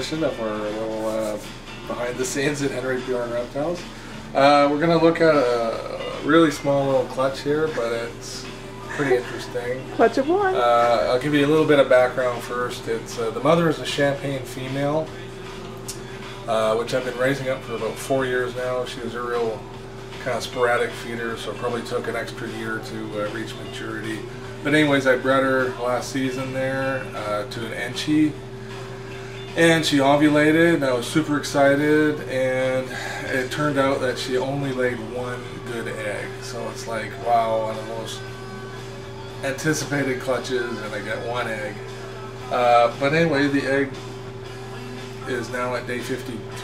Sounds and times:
Speech: 0:00.0 - 0:03.8, 0:04.4 - 0:15.2, 0:16.5 - 0:19.6, 0:20.2 - 0:28.4, 0:29.6 - 0:38.3, 0:39.4 - 0:41.9, 0:42.5 - 0:44.0, 0:45.2 - 0:46.6
Music: 0:00.0 - 0:46.6.

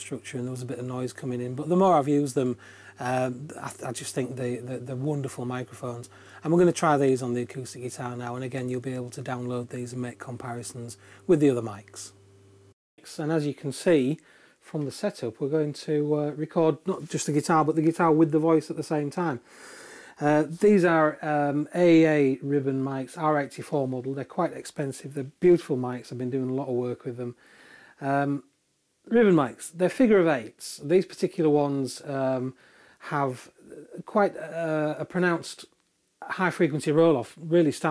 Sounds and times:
Speech: 0:00.0 - 0:12.2, 0:13.0 - 0:19.4, 0:20.2 - 0:27.4, 0:28.0 - 0:28.5, 0:29.1 - 0:37.9.

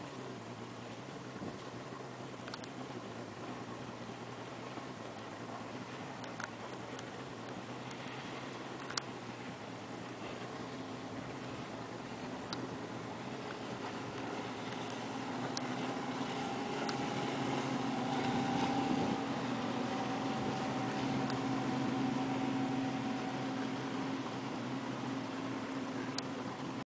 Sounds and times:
Motorboat, speedboat: 0:00.0 - 0:26.8.

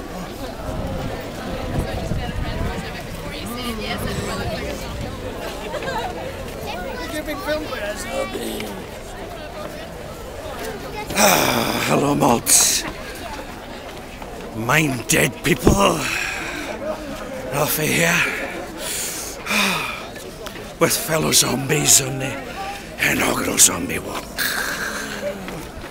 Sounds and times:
Speech: 0:11.1 - 0:13.0, 0:14.6 - 0:18.7, 0:20.8 - 0:24.6.

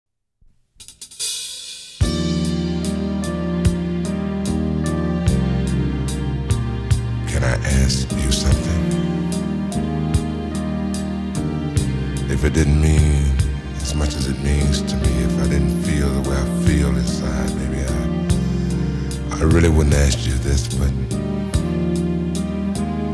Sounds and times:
Speech: 0:07.3 - 0:09.0, 0:12.3 - 0:18.1, 0:19.3 - 0:21.1.

